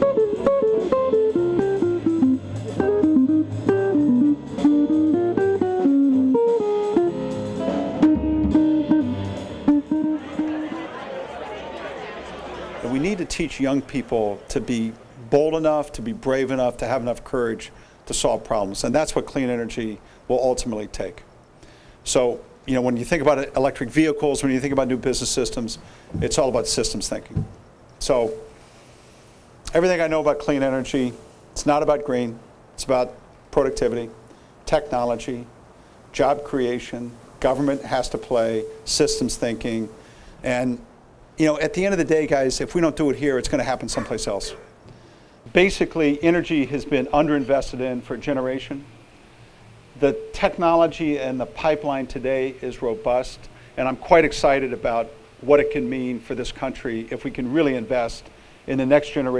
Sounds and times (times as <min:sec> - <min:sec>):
Male speech, man speaking: 0:12.8 - 0:21.2, 0:22.1 - 0:27.4, 0:28.0 - 0:28.4, 0:29.7 - 0:35.5, 0:36.2 - 0:40.8, 0:41.4 - 0:44.7, 0:45.5 - 0:48.9, 0:50.0 - 0:59.3
Narration, monologue: 0:12.8 - 0:59.3.